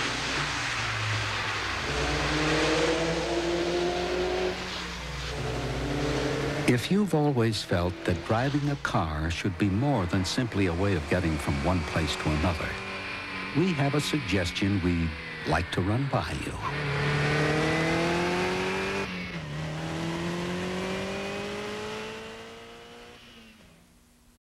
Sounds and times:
Speech: 6.7s - 12.8s, 13.6s - 16.8s.

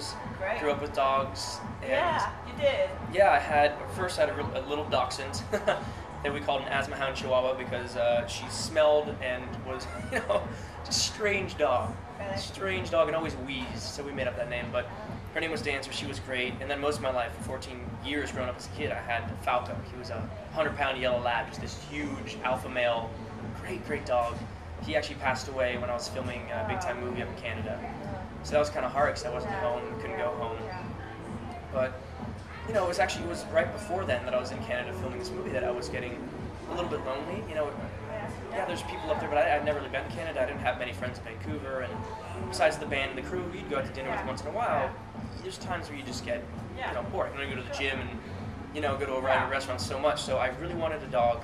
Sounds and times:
Music: 0.0s - 51.4s.

